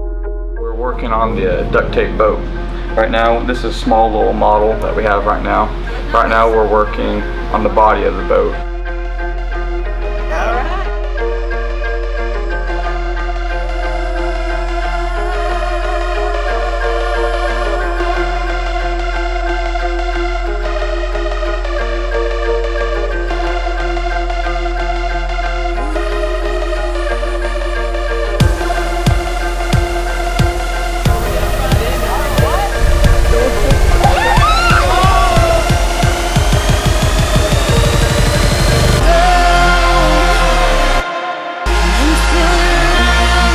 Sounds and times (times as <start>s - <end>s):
Music: 0.0s - 43.5s
Speech: 0.7s - 2.4s, 3.0s - 8.6s, 10.3s - 10.9s, 31.6s - 33.8s.